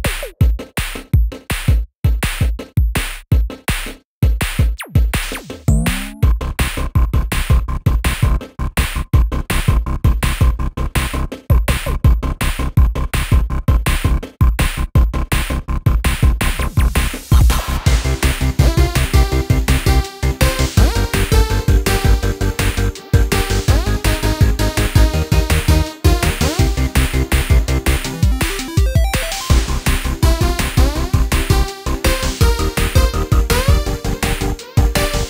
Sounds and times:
Music: 0.0 - 35.3.

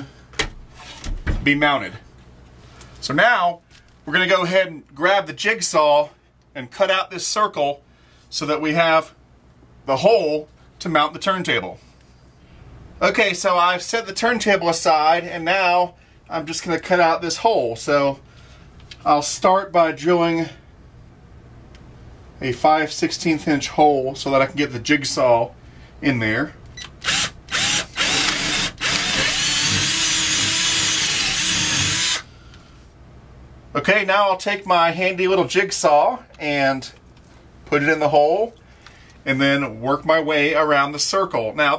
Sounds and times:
Speech: 1.4 - 2.1, 3.0 - 9.2, 9.9 - 11.8, 13.0 - 18.2, 19.0 - 20.6, 22.4 - 26.6, 33.8 - 37.0, 37.7 - 38.6, 39.2 - 41.7
Drill: 27.0 - 32.3.

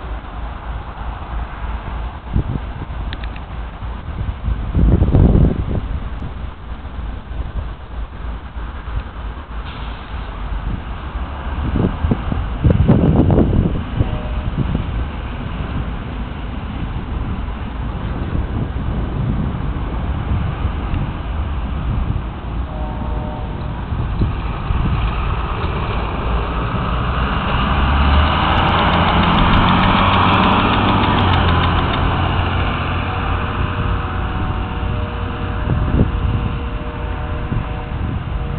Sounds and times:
Bus: 0.0 - 38.5.

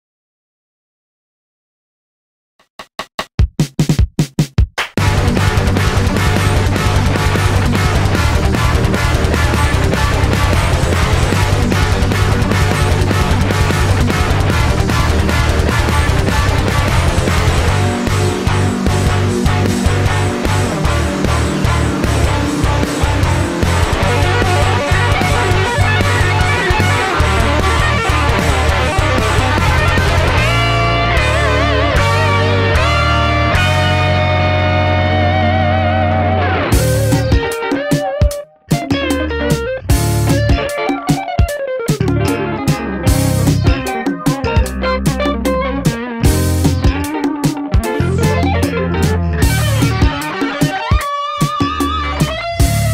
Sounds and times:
Drum machine: 2.7 - 34.3, 36.6 - 52.9
Guitar: 5.0 - 52.9
Heavy metal: 5.0 - 52.9.

